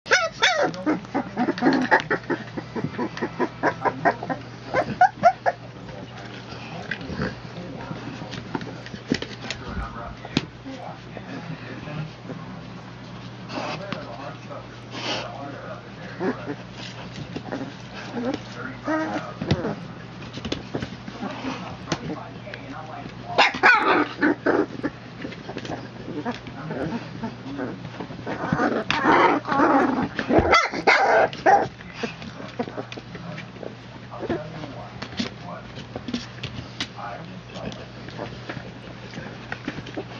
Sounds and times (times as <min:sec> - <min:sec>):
Dog: 0:00.1 - 0:05.6, 0:23.4 - 0:34.5
Speech: 0:05.7 - 0:12.7, 0:13.6 - 0:16.6, 0:18.2 - 0:20.0, 0:21.2 - 0:24.0, 0:26.5 - 0:27.8, 0:32.3 - 0:36.2, 0:36.9 - 0:38.3.